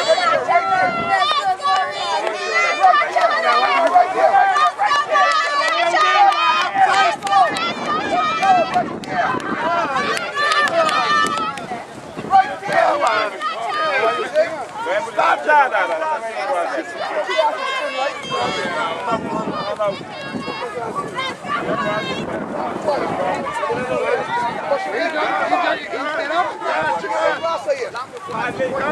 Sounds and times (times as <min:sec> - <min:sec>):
Speech: 0:00.0 - 0:28.9.